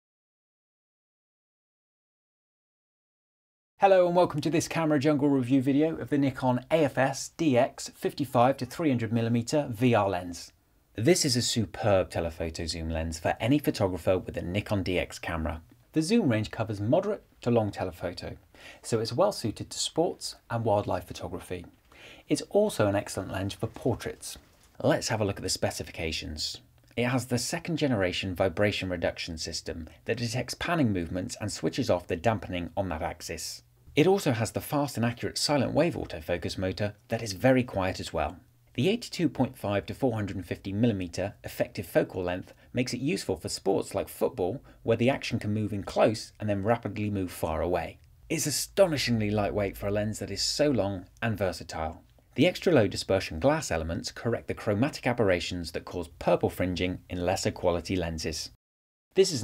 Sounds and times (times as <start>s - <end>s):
Speech: 3.8s - 58.6s, 59.2s - 59.4s.